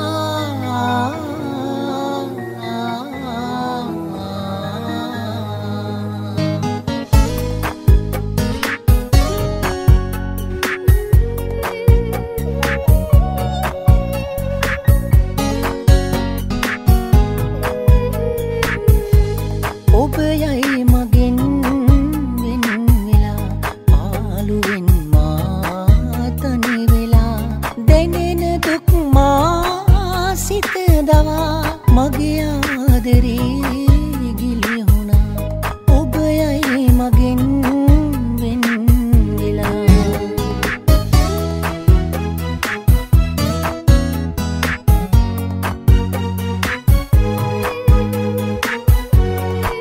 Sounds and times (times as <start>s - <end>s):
Music: 0.0s - 49.8s.